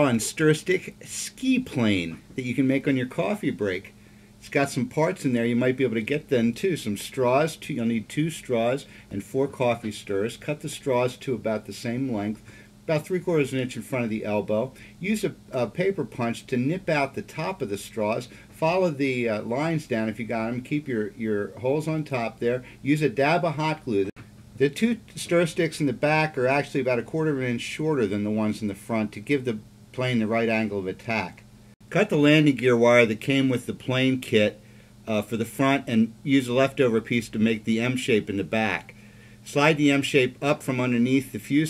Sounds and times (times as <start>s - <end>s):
Speech: 0.0s - 41.7s.